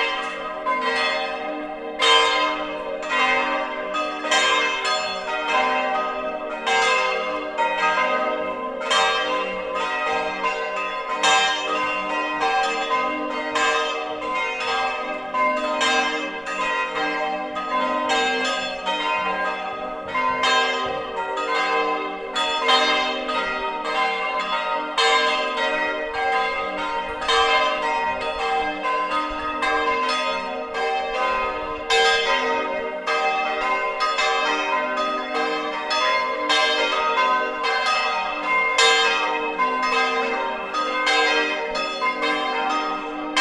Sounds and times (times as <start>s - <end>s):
Change ringing (campanology): 0.0s - 43.4s.